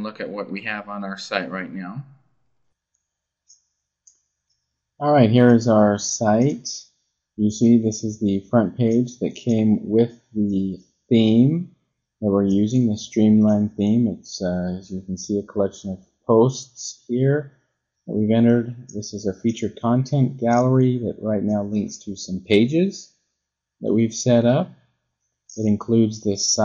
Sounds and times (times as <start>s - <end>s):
Speech: 0.0s - 2.0s, 5.0s - 6.8s, 7.4s - 11.6s, 12.2s - 17.4s, 18.1s - 23.0s, 23.8s - 24.7s, 25.5s - 26.6s.